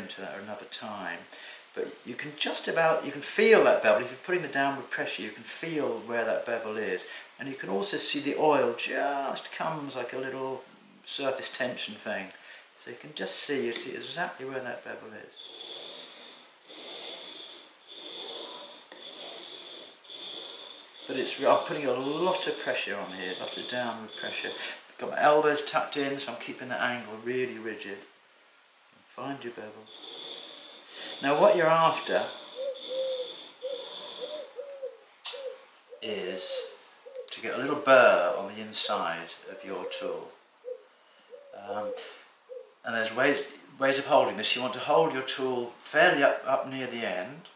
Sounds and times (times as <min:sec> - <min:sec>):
Speech: 0:00.0 - 0:15.4, 0:21.1 - 0:28.1, 0:29.1 - 0:29.9, 0:31.2 - 0:32.4, 0:36.0 - 0:40.4, 0:41.6 - 0:42.1, 0:42.9 - 0:47.5.